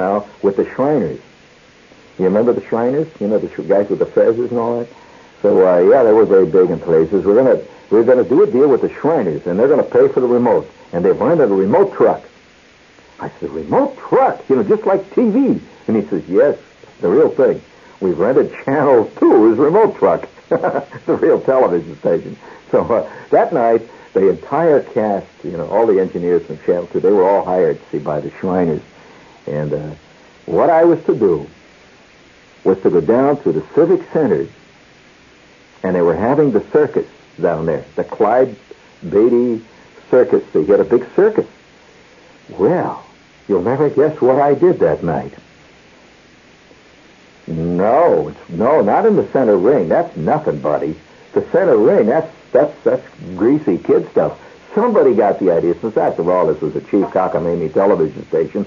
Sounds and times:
Speech: 0.0s - 1.3s, 2.2s - 12.3s, 13.2s - 31.6s, 32.6s - 34.6s, 35.8s - 41.5s, 42.5s - 45.4s, 47.5s - 58.6s.

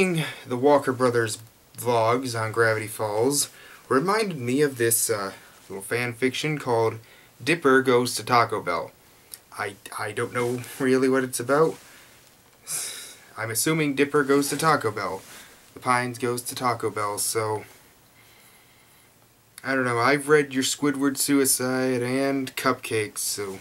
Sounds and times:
Speech: 0.0s - 11.8s, 13.4s - 17.7s, 19.6s - 23.6s.

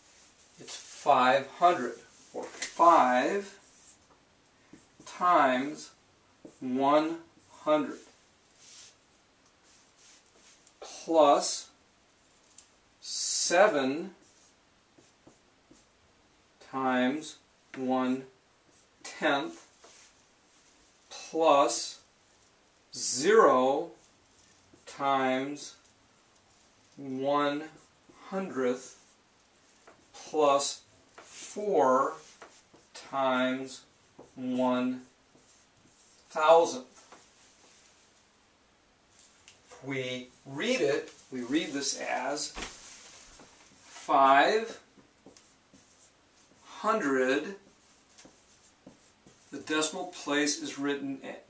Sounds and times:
Speech: 0.6s - 3.6s, 5.0s - 8.1s, 10.8s - 11.8s, 13.0s - 14.2s, 16.6s - 18.3s, 19.1s - 19.7s, 21.1s - 22.0s, 22.9s - 24.0s, 24.8s - 25.8s, 27.0s - 29.0s, 30.2s - 30.9s, 31.5s - 32.2s, 33.0s - 35.1s, 36.3s - 36.9s, 39.8s - 42.6s, 44.0s - 44.9s, 46.7s - 47.6s, 49.5s - 51.4s.

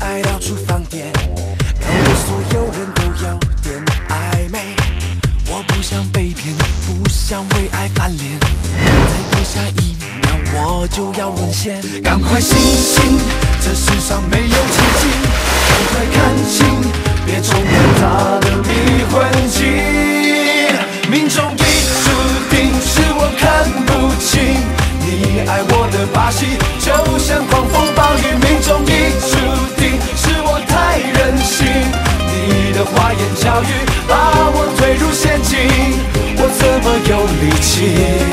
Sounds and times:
Music: 0.0s - 38.3s.

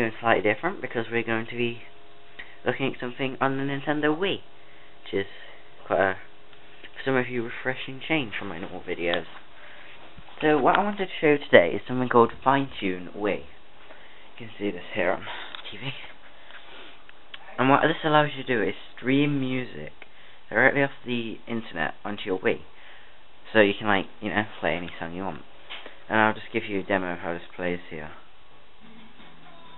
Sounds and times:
Speech: 0.0s - 1.9s, 2.6s - 6.3s, 6.9s - 9.4s, 10.4s - 13.6s, 14.4s - 16.2s, 17.4s - 22.7s, 23.4s - 25.5s, 26.1s - 28.3s.

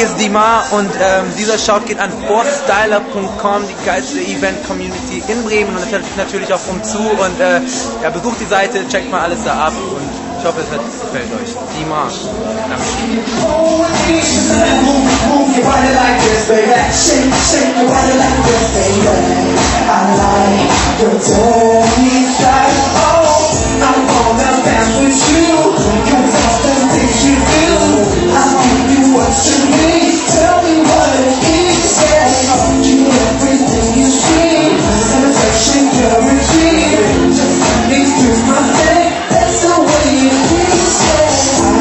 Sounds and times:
Speech: 0.0s - 13.2s.

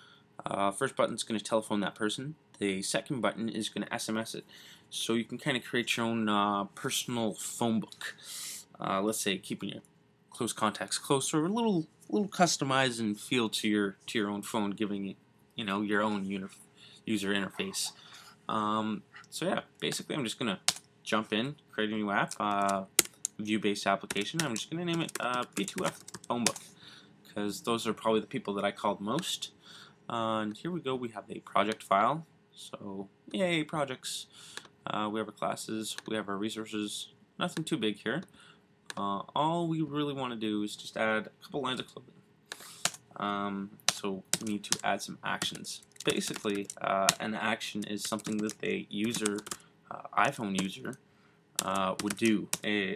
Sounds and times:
Speech: 0.4s - 38.3s, 38.9s - 42.1s, 43.2s - 51.0s, 51.6s - 52.9s.

